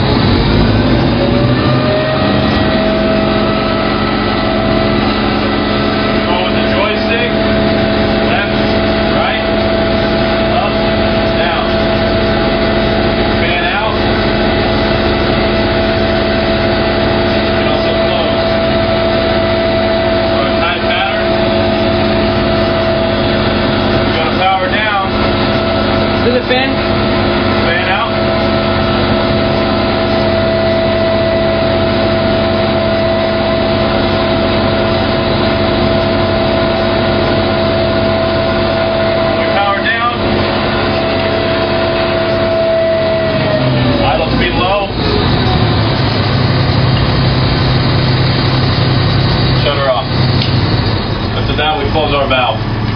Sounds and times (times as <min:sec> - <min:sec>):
Speech: 0:06.3 - 0:07.4, 0:08.3 - 0:09.5, 0:10.5 - 0:11.8, 0:13.4 - 0:14.0, 0:17.6 - 0:18.4, 0:20.4 - 0:21.3, 0:24.1 - 0:25.2, 0:26.2 - 0:26.8, 0:27.6 - 0:28.2, 0:39.4 - 0:40.2, 0:44.0 - 0:45.0, 0:49.6 - 0:50.1, 0:51.4 - 0:52.6.